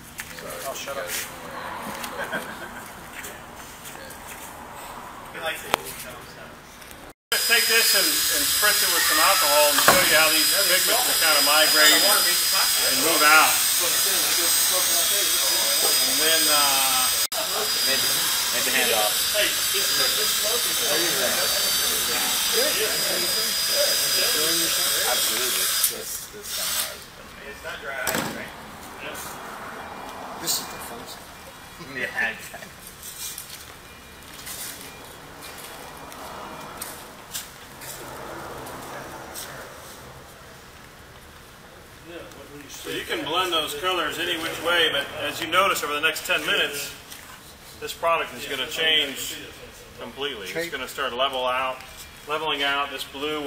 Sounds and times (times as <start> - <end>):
Speech: 0.3 - 1.4, 5.4 - 6.6, 7.4 - 29.3, 42.0 - 47.0, 47.8 - 53.4
Inside, large room or hall: 8.0 - 27.1.